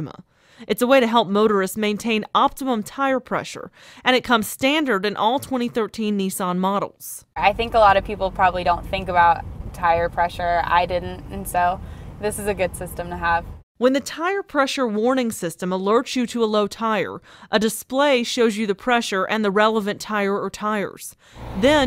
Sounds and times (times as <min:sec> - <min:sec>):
Speech: 0:00.0 - 0:21.8.